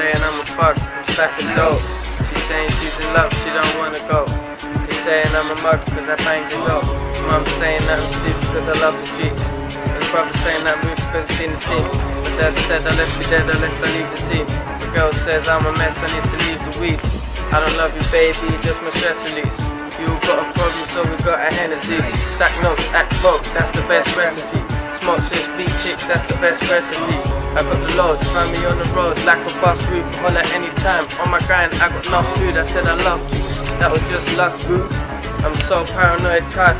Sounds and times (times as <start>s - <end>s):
Music: 0.0s - 36.7s
Speech: 0.0s - 36.7s.